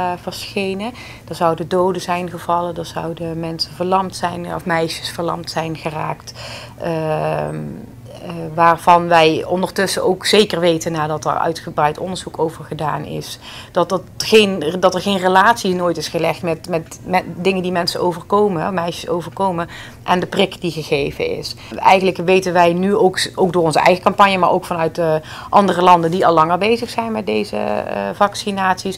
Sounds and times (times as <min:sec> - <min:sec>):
Speech: 0:00.0 - 0:28.9.